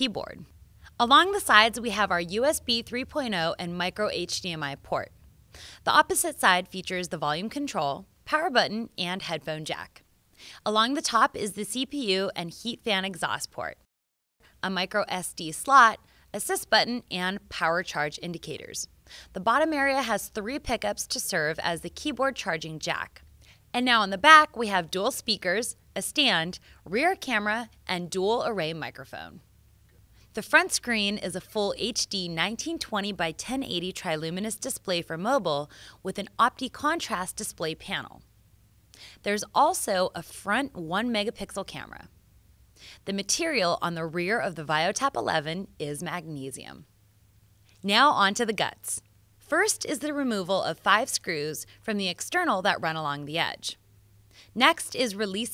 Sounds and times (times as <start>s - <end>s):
Speech: 0.0s - 5.1s, 5.8s - 10.0s, 10.6s - 13.9s, 14.6s - 29.4s, 30.4s - 38.2s, 39.2s - 42.1s, 43.0s - 46.9s, 47.8s - 53.8s, 54.6s - 55.5s.